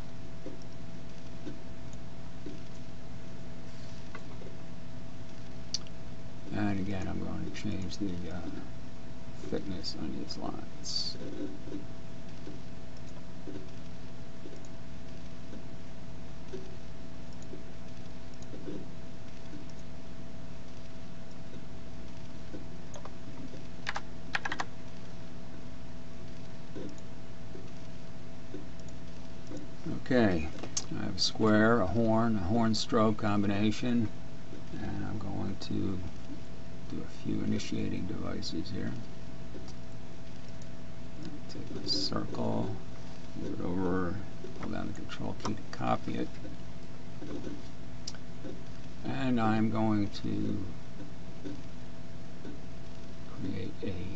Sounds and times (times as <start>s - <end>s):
Computer keyboard: 22.9s - 24.7s.